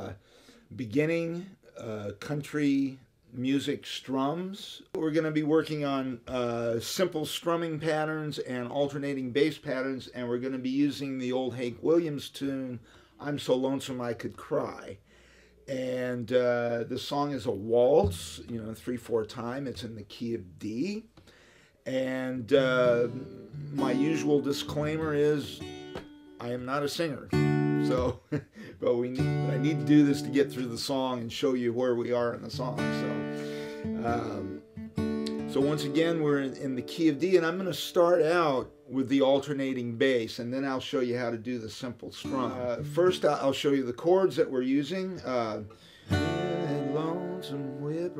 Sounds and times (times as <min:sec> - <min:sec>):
Speech: 0:00.0 - 0:15.0, 0:15.7 - 0:21.1, 0:21.9 - 0:25.6, 0:26.4 - 0:28.2, 0:28.8 - 0:33.2, 0:34.0 - 0:34.6, 0:35.5 - 0:45.7, 0:46.4 - 0:48.1
Guitar: 0:15.7 - 0:48.1.